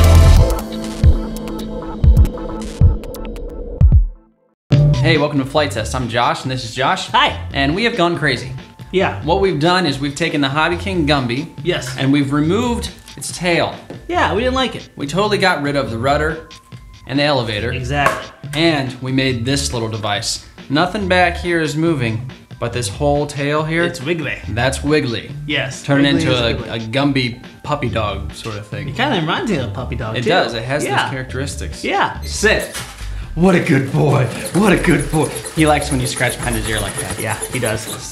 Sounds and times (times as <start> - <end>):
Music: 0.0 - 38.1
Speech: 5.0 - 16.4, 17.1 - 32.7, 33.4 - 38.1.